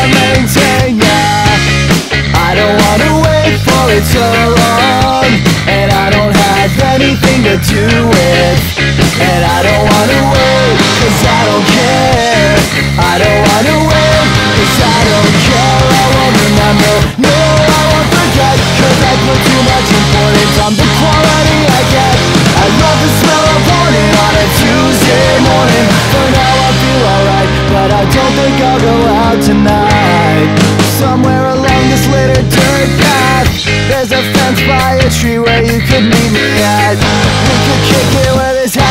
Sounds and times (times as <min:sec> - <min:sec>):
Grunge: 0:00.0 - 0:38.9.